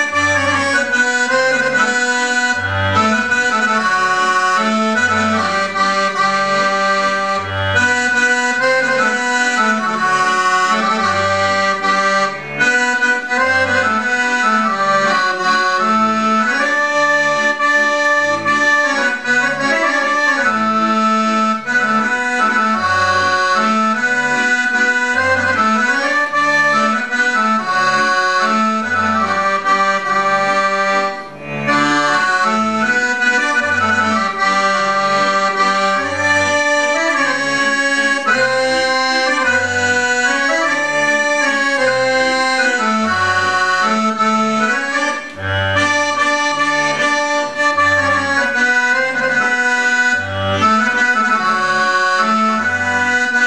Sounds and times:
Accordion: 0:00.0 - 0:53.4.

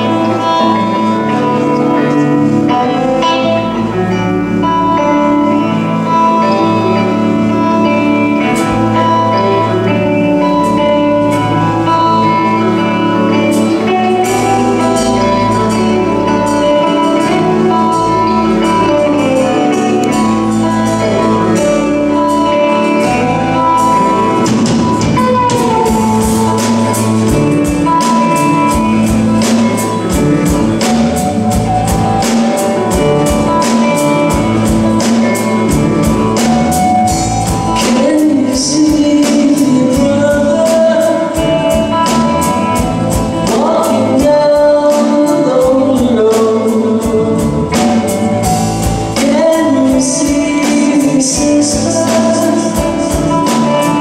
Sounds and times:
Music: 0:00.0 - 0:54.0.

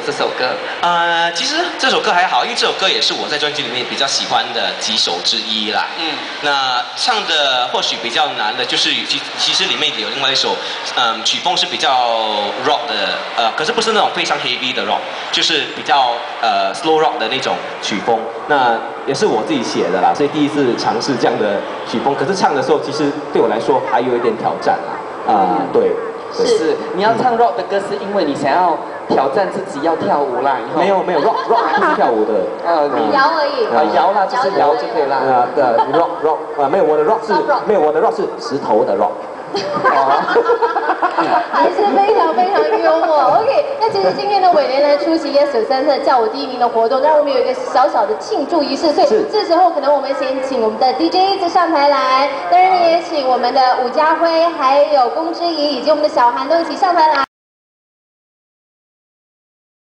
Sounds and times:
Male speech, man speaking: 0:00.0 - 0:40.4, 0:41.2 - 0:45.1, 0:48.6 - 0:49.4
Laughter: 0:31.1 - 0:32.2, 0:35.6 - 0:36.3, 0:39.5 - 0:43.1.

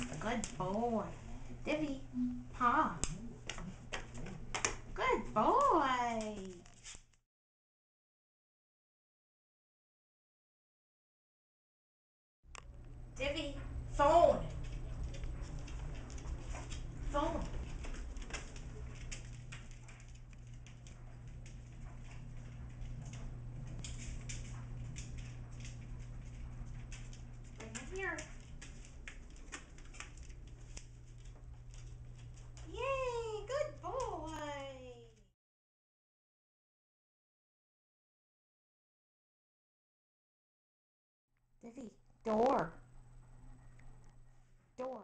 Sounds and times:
Speech: 0:00.0 - 0:03.1, 0:05.0 - 0:06.6, 0:13.2 - 0:14.8, 0:17.1 - 0:17.6, 0:27.6 - 0:28.3, 0:32.7 - 0:35.3, 0:41.6 - 0:42.8, 0:44.8 - 0:45.0.

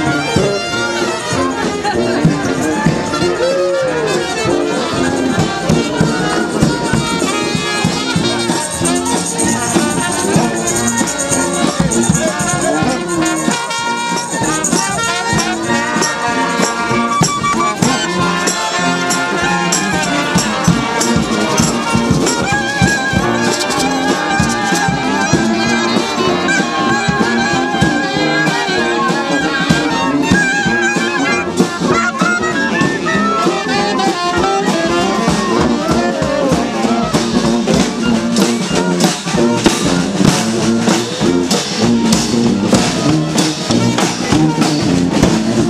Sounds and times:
Happy music: 0:00.0 - 0:45.7
Traditional music: 0:00.0 - 0:45.7.

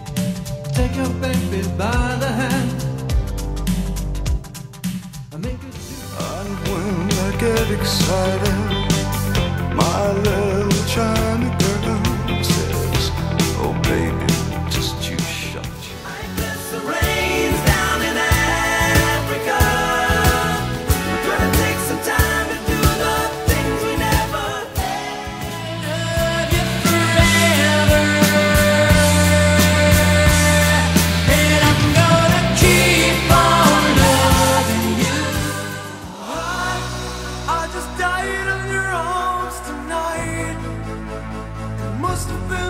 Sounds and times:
Music: 0:00.0 - 0:42.7.

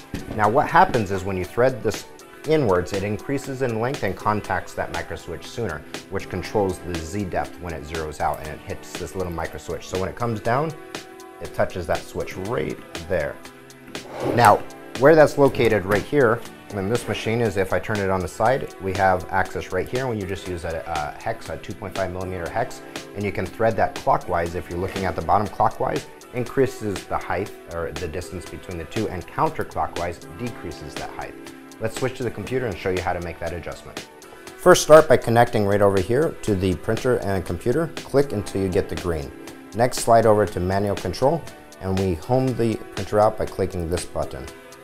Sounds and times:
Music: 0:00.0 - 0:44.8
Speech: 0:00.3 - 0:10.8, 0:11.4 - 0:13.4, 0:14.3 - 0:44.5.

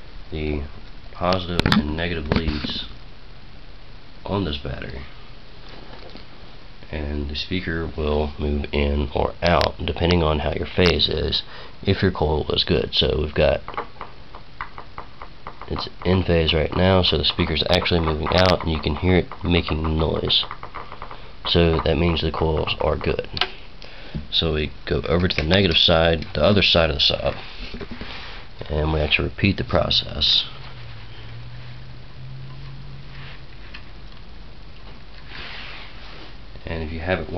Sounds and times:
Speech: 0:00.3 - 0:03.0, 0:04.2 - 0:05.1, 0:06.9 - 0:13.7, 0:15.7 - 0:20.5, 0:21.5 - 0:23.4, 0:24.3 - 0:27.4, 0:28.6 - 0:30.6, 0:36.6 - 0:37.3.

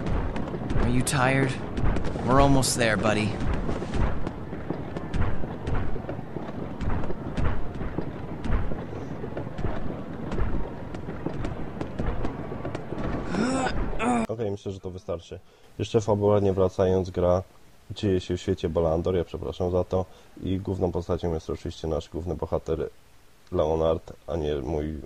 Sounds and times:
Speech: 0:00.8 - 0:01.6, 0:02.2 - 0:03.4, 0:14.0 - 0:22.9, 0:23.5 - 0:25.0.

